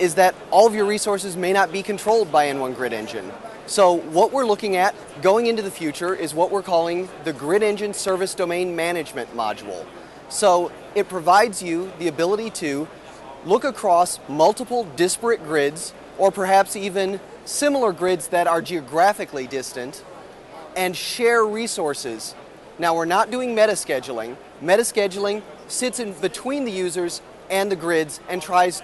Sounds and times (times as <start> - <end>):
Speech: 0.0 - 20.0, 20.6 - 28.8.